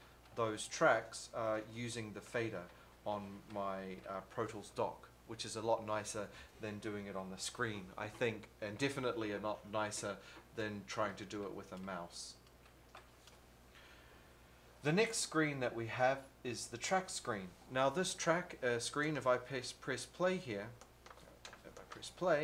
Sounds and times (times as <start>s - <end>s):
Speech: 0.4s - 12.4s, 14.8s - 20.8s, 21.6s - 22.4s.